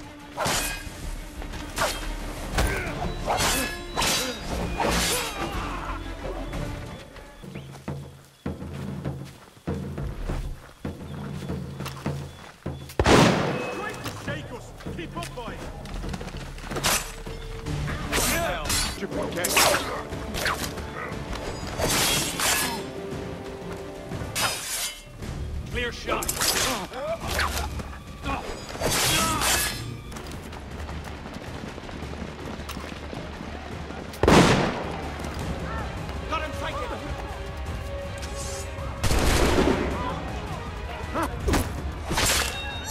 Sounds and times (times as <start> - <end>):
Speech: 13.7 - 15.7.